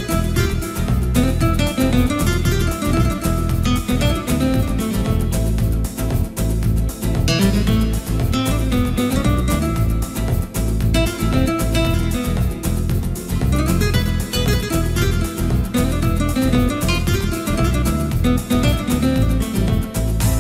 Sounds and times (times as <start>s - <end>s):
Music: 0.0s - 20.4s.